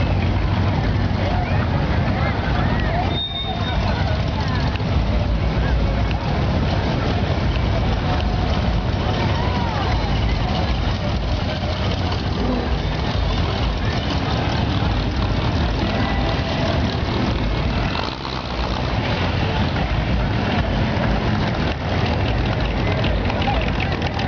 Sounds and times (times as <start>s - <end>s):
Car: 0.0s - 24.2s.